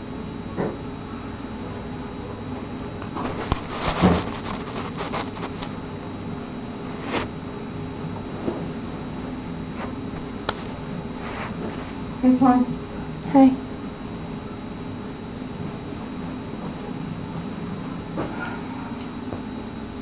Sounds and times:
Speech: 0:12.2 - 0:12.7, 0:13.3 - 0:13.6.

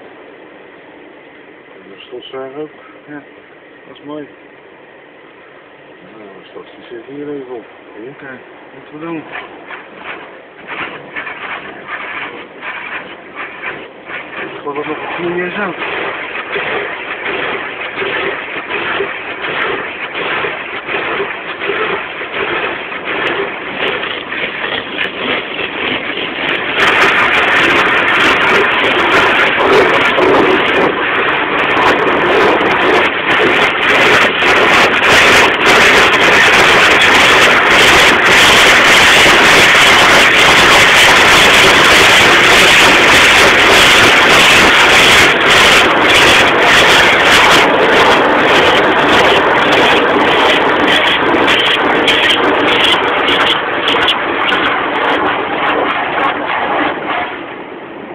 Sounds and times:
Speech: 0:01.8 - 0:03.3, 0:03.9 - 0:04.4, 0:06.0 - 0:09.3, 0:14.6 - 0:15.8.

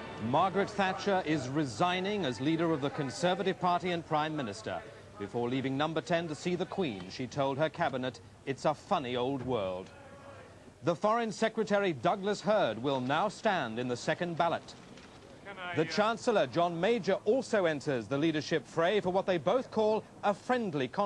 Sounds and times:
Speech: 0:00.2 - 0:14.8, 0:15.4 - 0:21.0.

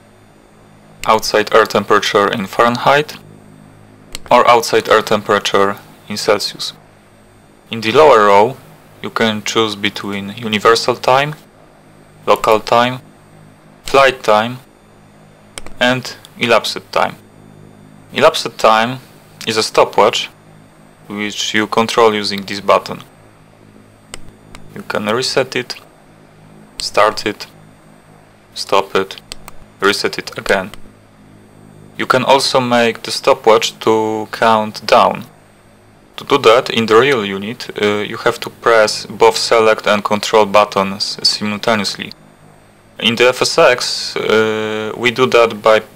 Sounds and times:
Speech: 0:01.0 - 0:03.2, 0:04.3 - 0:06.8, 0:07.7 - 0:11.4, 0:12.2 - 0:13.0, 0:13.9 - 0:14.7, 0:15.8 - 0:17.2, 0:18.1 - 0:20.4, 0:21.1 - 0:23.1, 0:24.7 - 0:25.9, 0:26.8 - 0:27.6, 0:28.6 - 0:29.2, 0:29.8 - 0:30.8, 0:32.0 - 0:35.3, 0:36.2 - 0:42.2, 0:43.0 - 0:45.9.

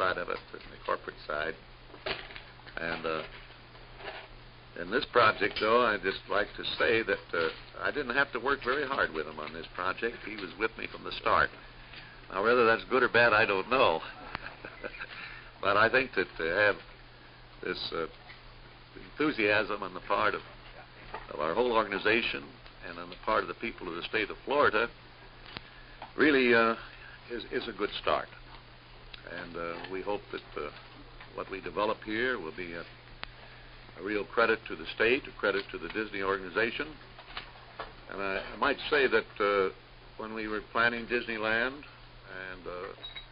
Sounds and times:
Speech: 0:00.0 - 0:01.6, 0:02.8 - 0:03.3, 0:04.8 - 0:11.6, 0:12.3 - 0:14.2, 0:15.6 - 0:16.9, 0:17.6 - 0:18.2, 0:19.0 - 0:25.0, 0:26.2 - 0:28.4, 0:29.2 - 0:32.9, 0:34.0 - 0:37.0, 0:38.1 - 0:43.0.

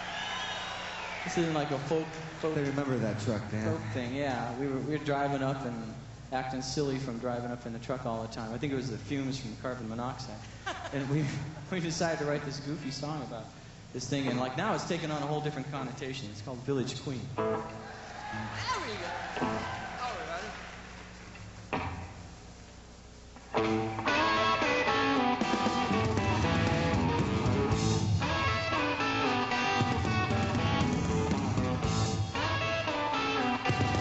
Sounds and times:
Music: 0:19.4 - 0:19.9, 0:23.5 - 0:34.0.

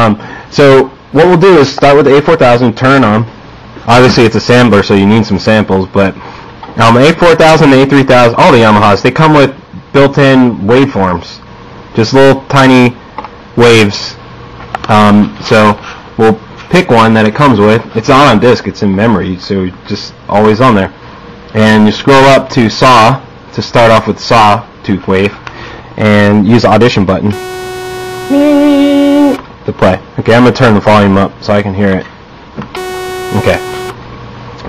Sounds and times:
Speech: 0:00.0 - 0:03.3, 0:03.9 - 0:06.2, 0:06.8 - 0:13.0, 0:13.6 - 0:14.2, 0:14.8 - 0:25.4, 0:26.0 - 0:27.4, 0:28.3 - 0:32.1, 0:33.3 - 0:33.7.

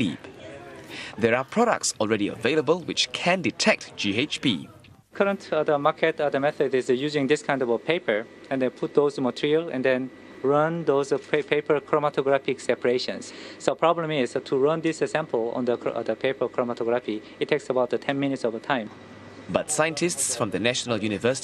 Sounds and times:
Speech: 0:00.0 - 0:18.9, 0:19.5 - 0:21.4.

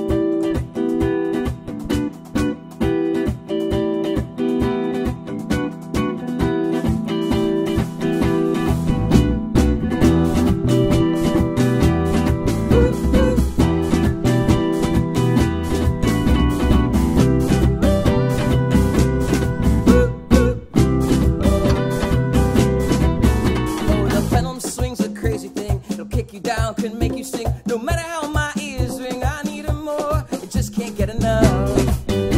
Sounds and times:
Music: 0:00.0 - 0:32.3.

